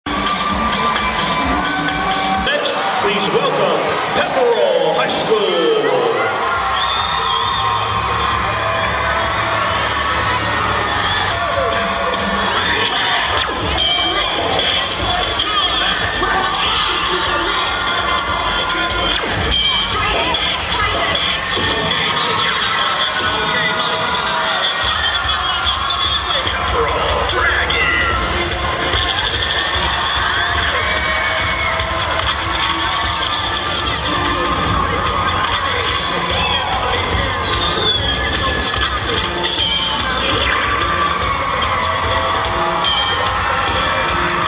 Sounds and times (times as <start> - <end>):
Music: 0.0 - 44.4
Cheering: 0.1 - 44.4
Speech: 2.5 - 6.4.